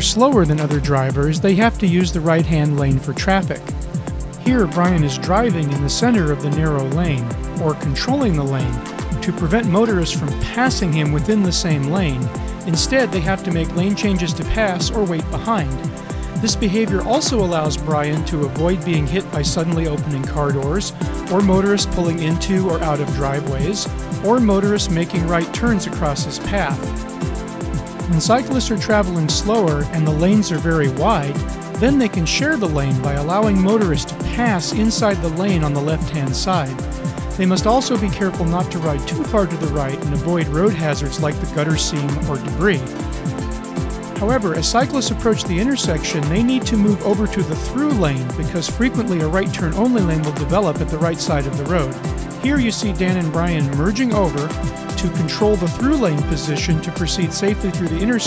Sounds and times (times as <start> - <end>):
Speech: 0.0 - 3.7, 4.4 - 26.9, 28.1 - 36.8, 37.4 - 43.0, 44.2 - 58.2
Music: 0.0 - 58.2.